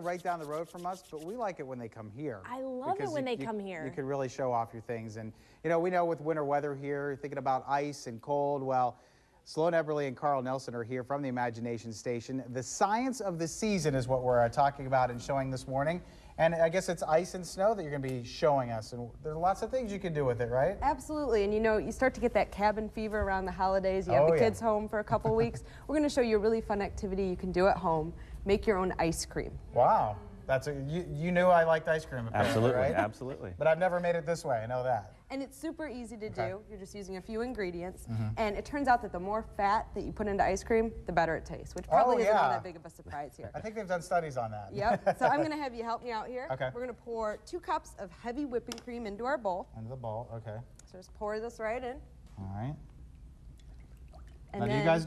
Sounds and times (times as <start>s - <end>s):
Speech: 2.6s - 4.1s, 24.1s - 24.6s, 36.3s - 36.6s, 41.8s - 42.7s, 54.6s - 55.0s.